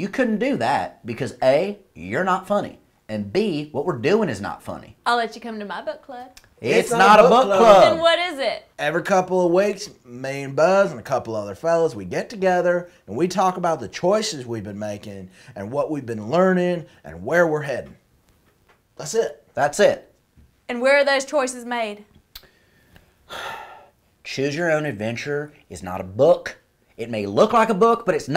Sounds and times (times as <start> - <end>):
Speech: 6.6 - 18.0.